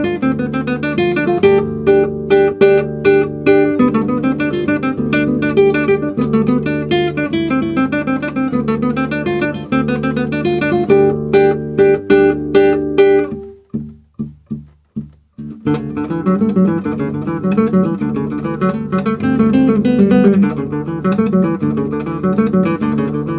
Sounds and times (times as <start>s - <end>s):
Acoustic guitar: 0.0s - 23.3s.